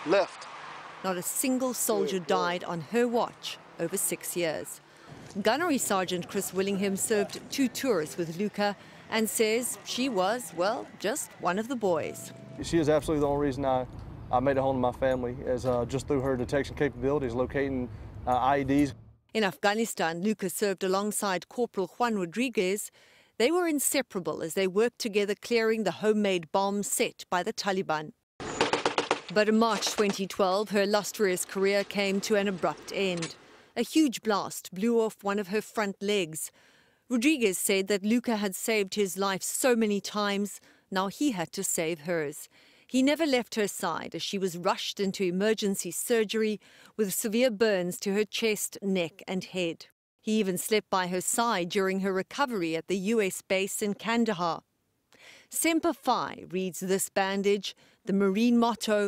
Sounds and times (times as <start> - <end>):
Speech: 1.1 - 4.8, 5.4 - 28.1, 29.4 - 36.5, 37.1 - 54.6, 55.6 - 59.0.